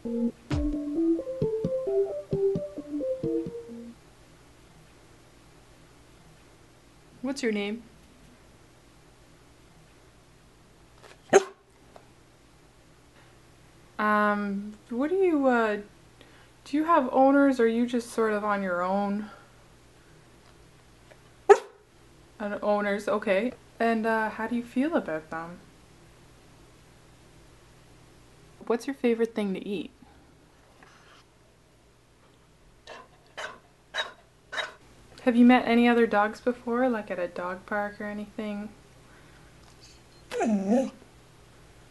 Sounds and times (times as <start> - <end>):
Speech: 7.2 - 7.9, 14.0 - 15.9, 16.7 - 19.4, 22.4 - 25.6, 28.6 - 30.0, 35.2 - 38.8
Bow-wow: 11.3 - 11.6, 21.5 - 21.8, 32.9 - 34.8.